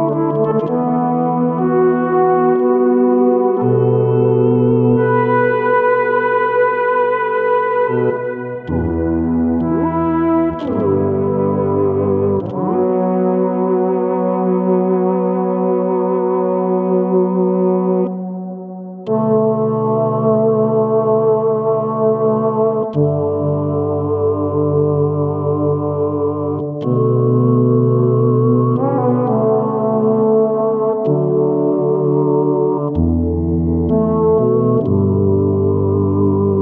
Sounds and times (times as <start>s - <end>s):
Electric guitar: 0.0s - 18.3s
Bass guitar: 0.0s - 36.6s.